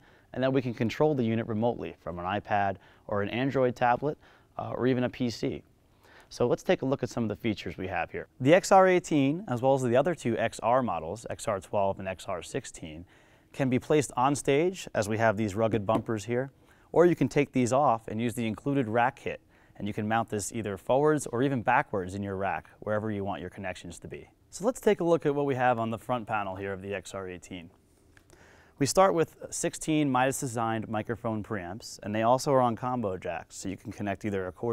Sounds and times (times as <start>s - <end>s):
Speech: 0.3s - 5.7s, 6.3s - 27.8s, 28.8s - 34.7s.